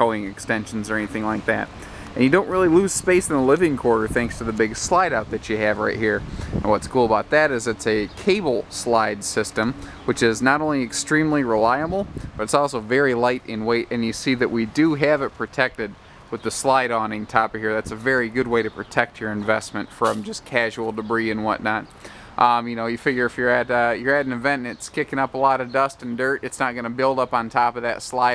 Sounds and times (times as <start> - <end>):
Speech: 0.0 - 28.3.